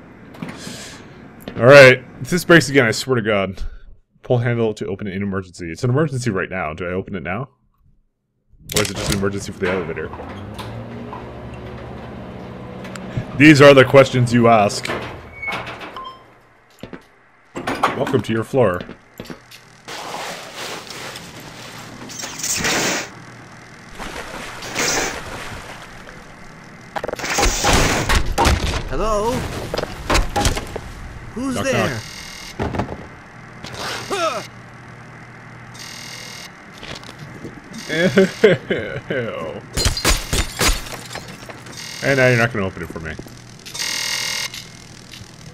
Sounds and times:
Speech: 0:04.2 - 0:07.5, 0:08.7 - 0:10.2, 0:13.4 - 0:14.9, 0:28.9 - 0:29.4, 0:31.4 - 0:32.0, 0:42.0 - 0:43.2.

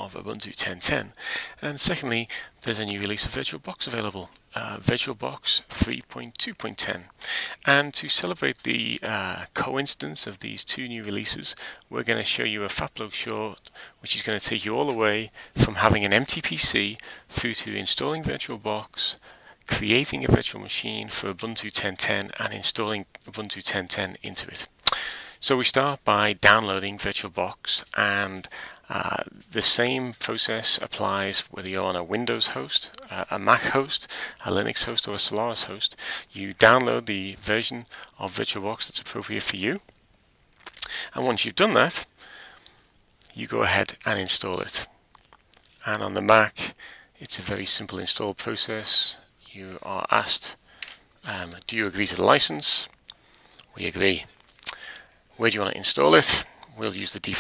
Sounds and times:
Speech: 0:00.0 - 0:24.7, 0:25.4 - 0:39.9, 0:40.8 - 0:42.1, 0:43.2 - 0:44.9, 0:45.8 - 0:50.6, 0:51.2 - 0:53.0, 0:53.7 - 0:54.4, 0:55.4 - 0:57.4.

